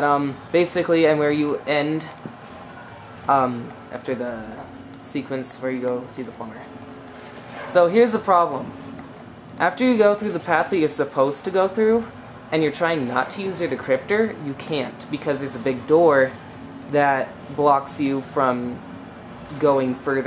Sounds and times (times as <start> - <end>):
Speech: 0.0 - 2.2, 3.3 - 6.7, 7.7 - 8.8, 9.6 - 18.8, 19.5 - 20.2.